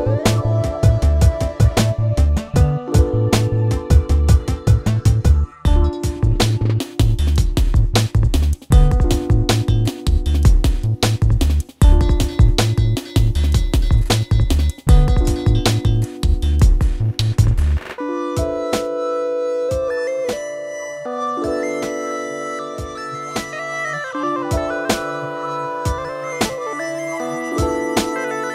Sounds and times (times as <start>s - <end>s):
Music: 0.0s - 28.5s.